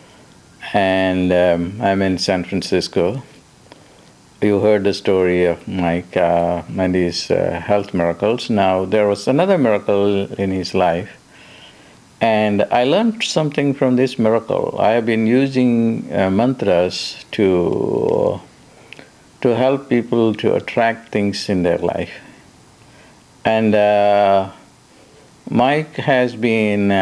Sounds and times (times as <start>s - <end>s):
Speech: 0.6s - 3.4s, 4.4s - 11.2s, 12.2s - 18.5s, 19.4s - 22.4s, 23.4s - 24.7s, 25.5s - 27.0s.